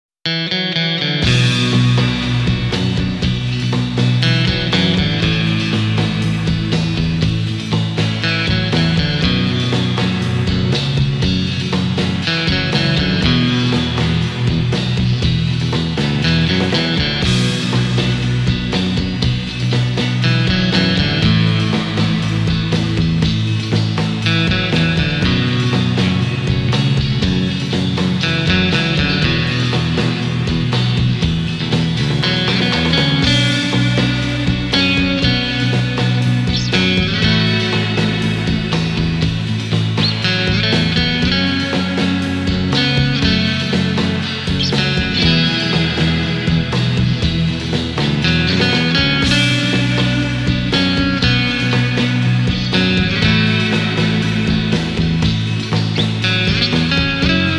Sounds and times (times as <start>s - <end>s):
Progressive rock: 0.3s - 57.5s.